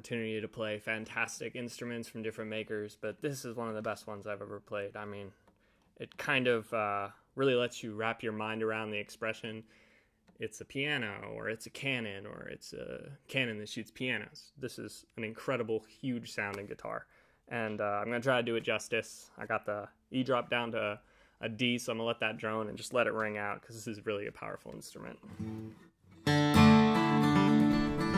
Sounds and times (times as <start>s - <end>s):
Speech: 0.0s - 5.4s, 6.0s - 9.7s, 10.4s - 25.3s.